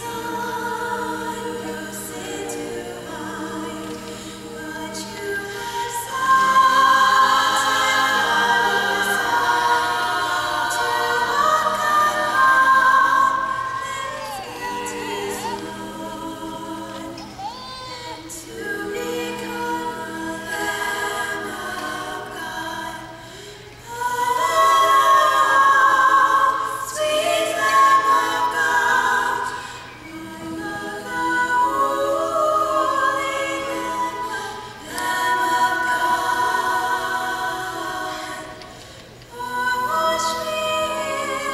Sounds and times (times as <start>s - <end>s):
Female singing: 0.0s - 23.1s, 39.3s - 41.5s
Choir: 0.0s - 41.5s.